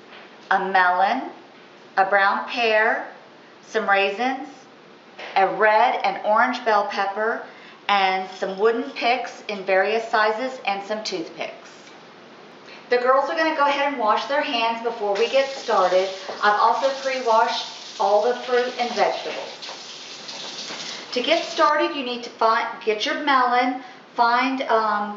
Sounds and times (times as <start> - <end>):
Speech: 0.5 - 1.4, 2.0 - 12.0, 12.9 - 19.6, 21.1 - 25.1.